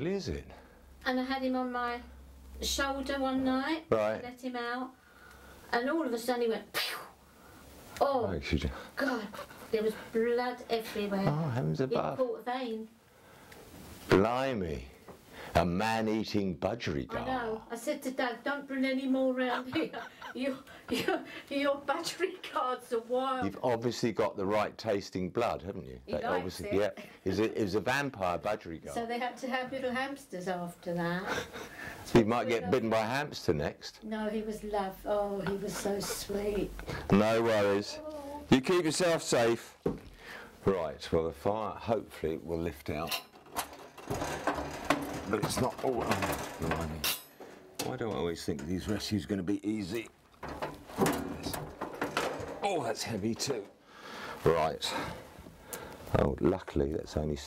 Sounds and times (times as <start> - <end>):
Inside, small room: 0.0 - 57.4.